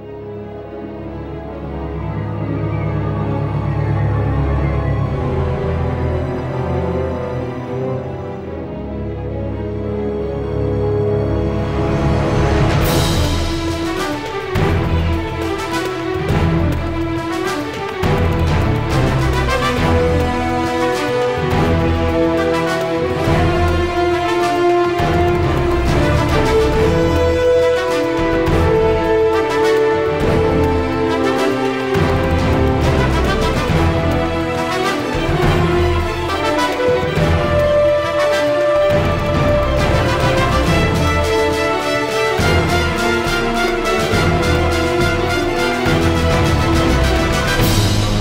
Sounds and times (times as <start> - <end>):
Exciting music: 0.0 - 48.2.